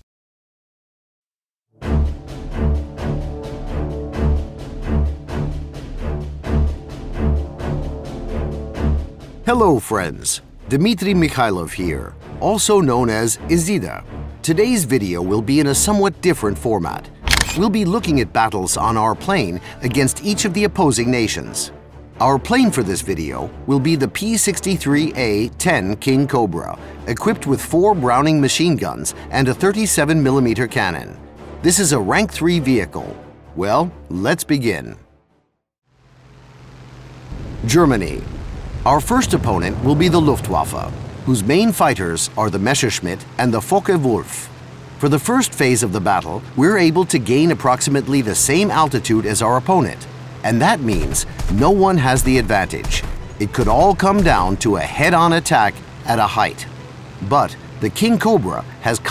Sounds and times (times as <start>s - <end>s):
Music: 1.7s - 35.6s, 38.9s - 59.1s
Speech: 9.5s - 35.0s, 37.6s - 59.1s.